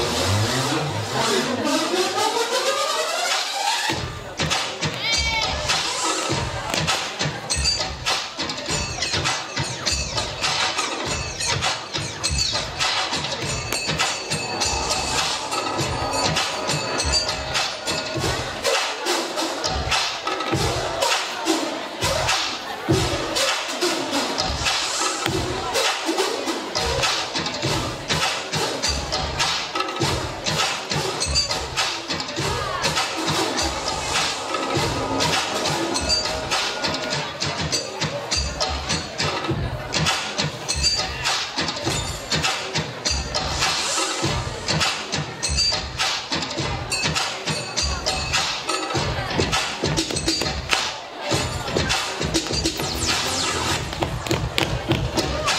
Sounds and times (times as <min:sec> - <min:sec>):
Speech: 0:00.0 - 0:02.6, 0:03.9 - 0:15.2, 0:15.8 - 0:55.5
Dance music: 0:00.0 - 0:55.5.